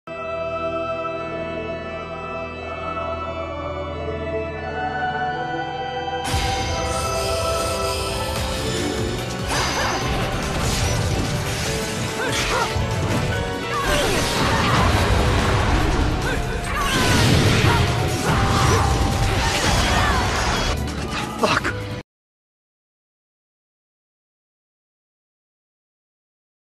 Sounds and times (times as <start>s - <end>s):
Theme music: 0.1s - 22.0s.